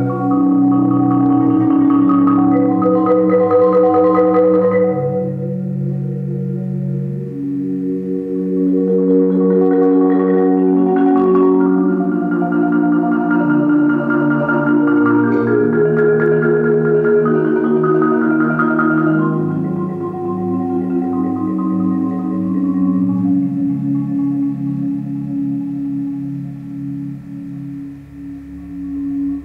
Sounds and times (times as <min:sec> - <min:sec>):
Marimba, xylophone: 0:00.0 - 0:29.4.